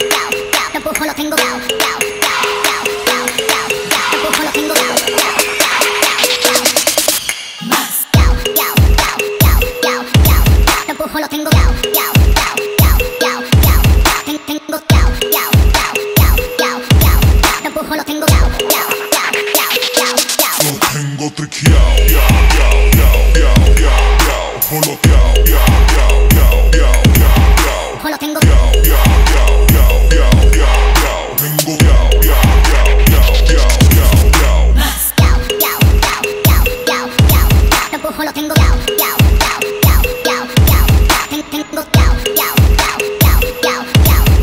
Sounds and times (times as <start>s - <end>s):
Music: 0.0s - 44.4s.